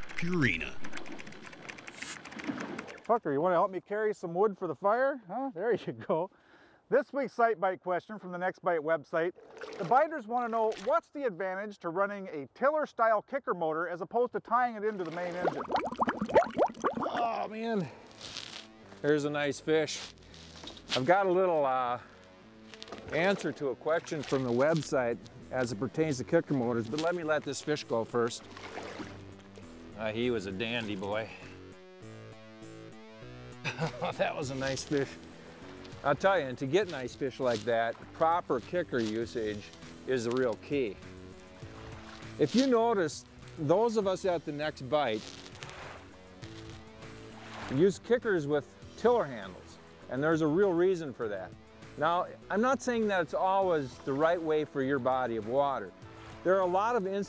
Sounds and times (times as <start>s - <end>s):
Speech: 0.2s - 0.8s, 3.1s - 6.3s, 6.9s - 15.6s, 21.0s - 22.0s, 23.1s - 28.4s, 30.0s - 31.5s, 34.2s - 35.2s, 36.0s - 41.0s, 42.4s - 45.2s, 47.7s - 55.9s, 56.5s - 57.2s
Music: 16.8s - 57.2s.